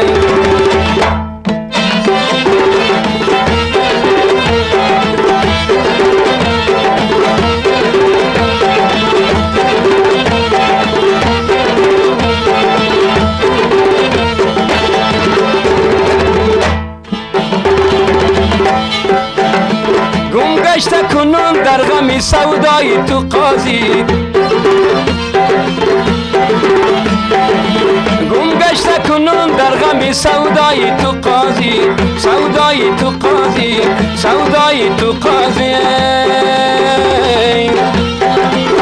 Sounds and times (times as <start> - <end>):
Music: 0.0 - 38.8.